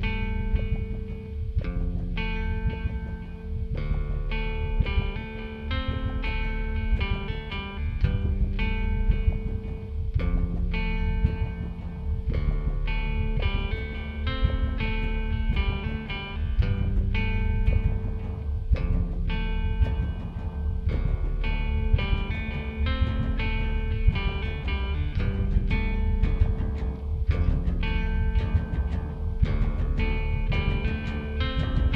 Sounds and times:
Music: 0.0 - 31.9.

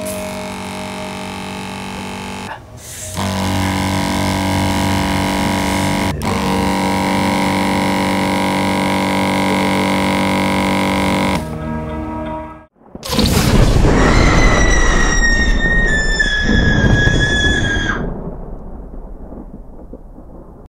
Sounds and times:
Music: 11.3 - 12.8.

